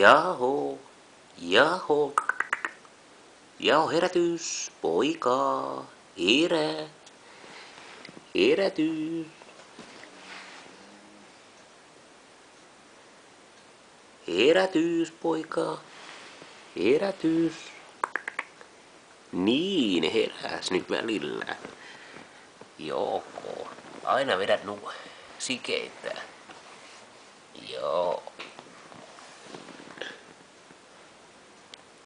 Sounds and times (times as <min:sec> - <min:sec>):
Speech: 0:00.0 - 0:00.8, 0:01.4 - 0:02.2, 0:19.3 - 0:21.7, 0:22.8 - 0:26.4, 0:27.6 - 0:28.4.